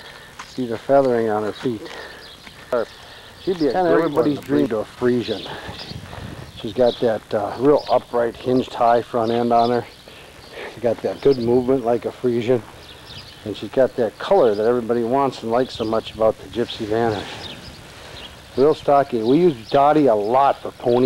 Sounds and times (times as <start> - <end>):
Speech: 0.6 - 1.9, 3.5 - 5.6, 6.6 - 9.9, 10.6 - 12.7, 13.4 - 17.4, 18.6 - 21.0.